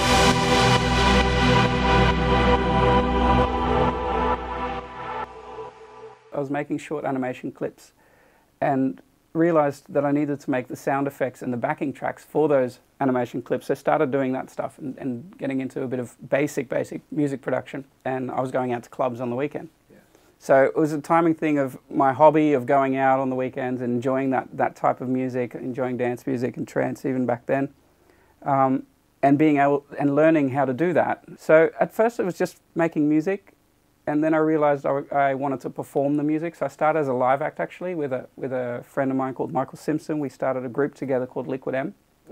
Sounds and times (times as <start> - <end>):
Music: 0.0 - 6.4
Speech: 6.4 - 8.0, 8.6 - 27.8, 28.4 - 42.3.